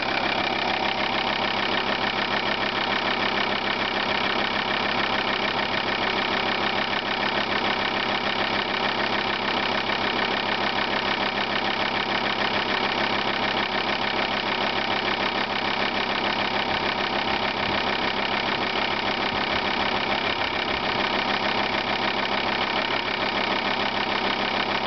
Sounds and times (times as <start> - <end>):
Medium engine (mid frequency): 0.0 - 24.8
Vehicle: 0.0 - 24.8.